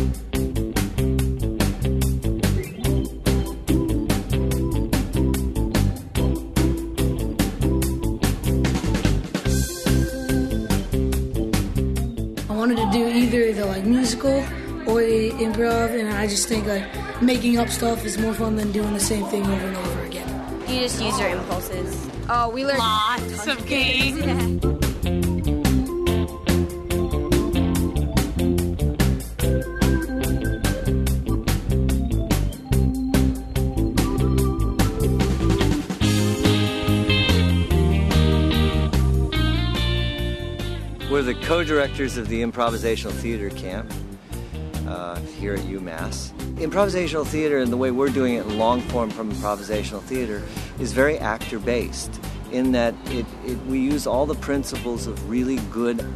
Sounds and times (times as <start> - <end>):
Music: 0.0 - 56.1.